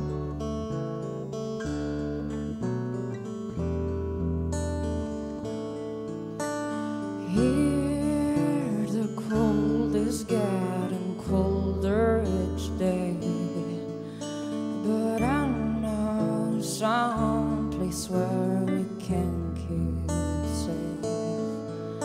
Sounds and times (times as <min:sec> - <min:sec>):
Lullaby: 0:07.2 - 0:22.0.